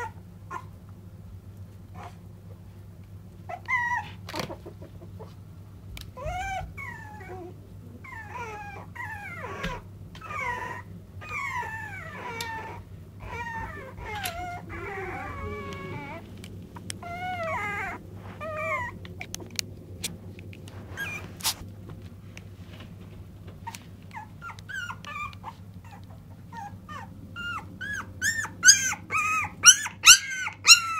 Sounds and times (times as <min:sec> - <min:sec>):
Dog: 0:06.2 - 0:16.2, 0:20.9 - 0:21.6, 0:23.6 - 0:30.9.